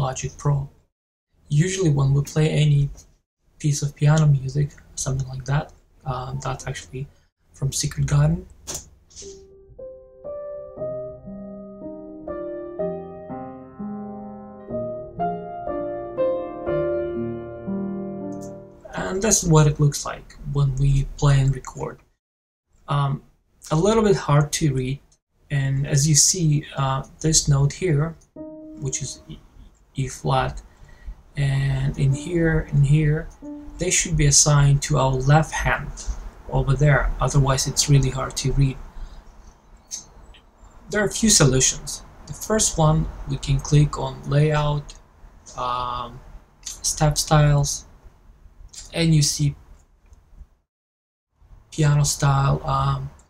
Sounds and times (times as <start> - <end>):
Speech: 0.0 - 0.7, 1.5 - 8.5, 18.9 - 22.0, 22.9 - 28.2, 28.8 - 29.4, 30.0 - 30.6, 31.4 - 38.8, 40.9 - 47.9, 48.8 - 49.6, 51.8 - 53.2.